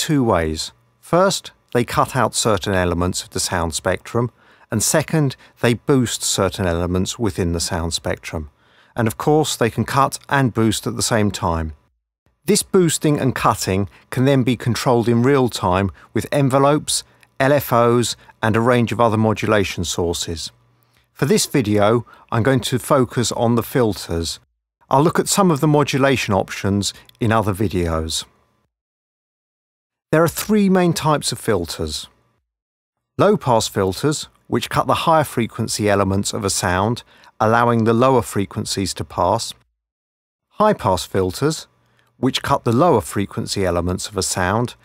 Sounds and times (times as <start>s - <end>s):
Speech: 0.0s - 11.8s, 12.4s - 20.6s, 21.2s - 28.4s, 30.2s - 32.2s, 33.2s - 39.6s, 40.6s - 44.8s.